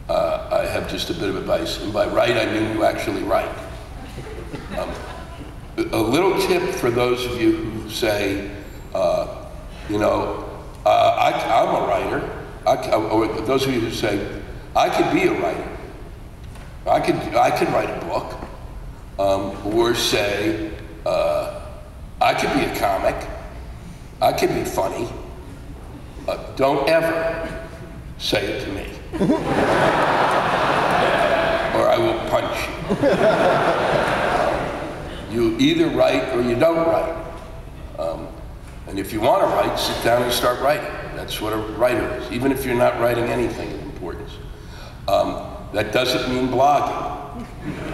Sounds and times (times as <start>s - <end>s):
Speech: 0.1s - 3.7s, 5.8s - 15.9s, 16.9s - 18.4s, 19.2s - 23.4s, 24.2s - 25.3s, 26.3s - 27.6s, 28.2s - 29.1s, 31.7s - 32.8s, 35.3s - 37.3s, 38.0s - 44.4s, 45.1s - 47.2s.